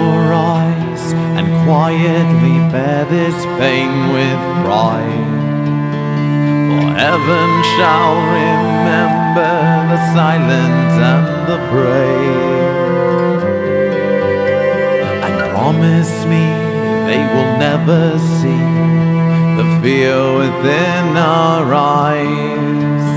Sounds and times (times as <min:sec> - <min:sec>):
Sad music: 0:00.0 - 0:23.1.